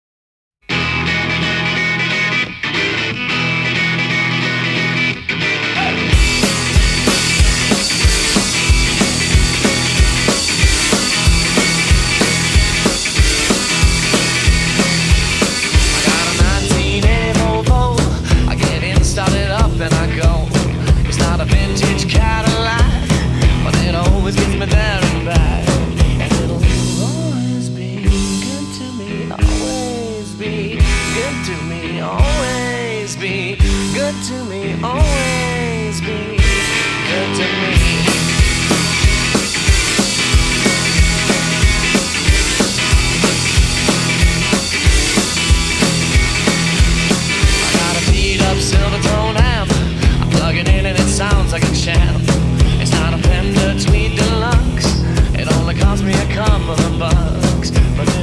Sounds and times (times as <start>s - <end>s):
Electric guitar: 0.6s - 58.2s.